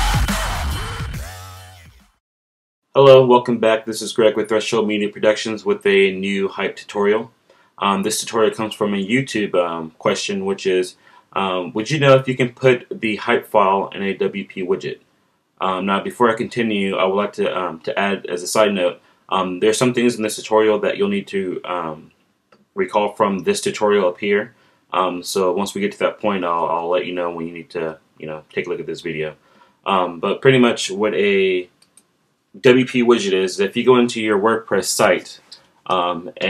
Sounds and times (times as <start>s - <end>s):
Speech: 3.0s - 15.0s, 15.6s - 22.2s, 22.8s - 31.8s, 32.6s - 36.5s.